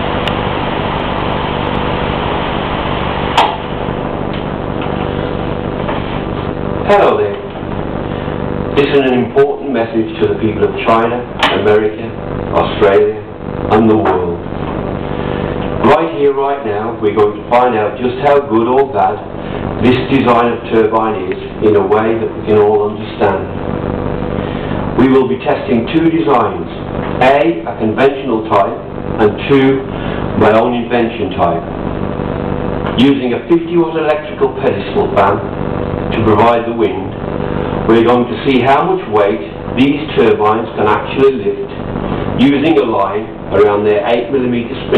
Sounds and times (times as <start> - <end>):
Speech: 6.8 - 7.5, 8.8 - 14.5, 15.8 - 23.6, 25.0 - 31.7, 32.9 - 35.5, 36.1 - 37.2, 37.8 - 41.8, 42.4 - 44.9.